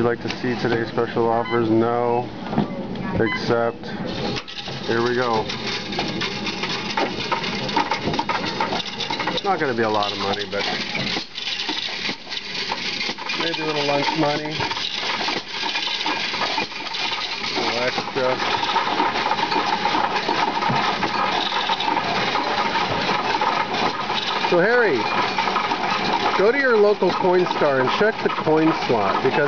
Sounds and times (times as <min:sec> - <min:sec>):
Coin (dropping): 0:04.1 - 0:29.4.